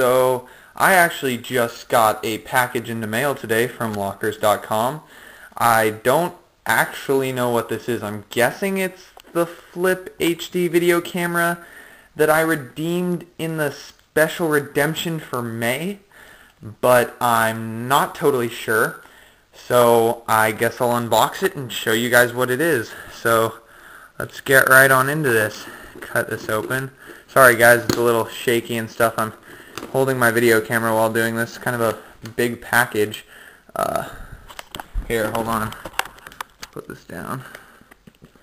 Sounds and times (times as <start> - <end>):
Speech: 0.0 - 11.6, 12.2 - 19.0, 19.6 - 23.6, 24.2 - 34.2, 35.0 - 35.8, 36.7 - 37.6.